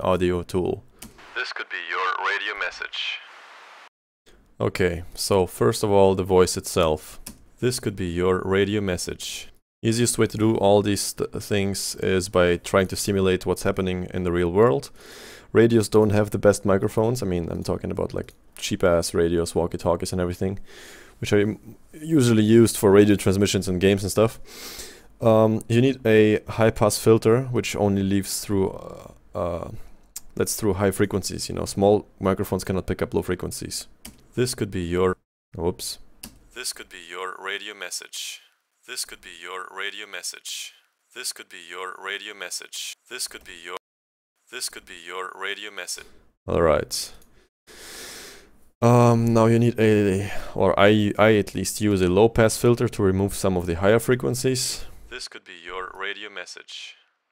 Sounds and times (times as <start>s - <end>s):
Speech: 0.0s - 0.8s, 1.4s - 3.3s, 4.6s - 14.9s, 15.5s - 20.6s, 21.2s - 24.4s, 25.2s - 29.8s, 30.4s - 36.0s, 36.6s - 43.8s, 44.5s - 47.2s, 48.8s - 57.0s.